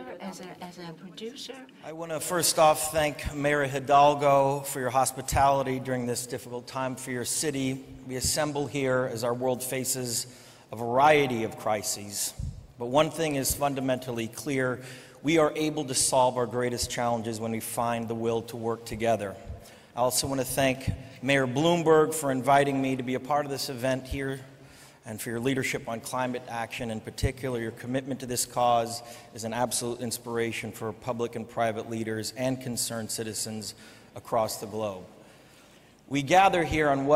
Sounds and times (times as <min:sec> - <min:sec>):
Narration, monologue: 0:00.0 - 0:37.1
Male speech, man speaking: 0:01.2 - 0:19.4, 0:20.0 - 0:35.1, 0:36.1 - 0:37.1.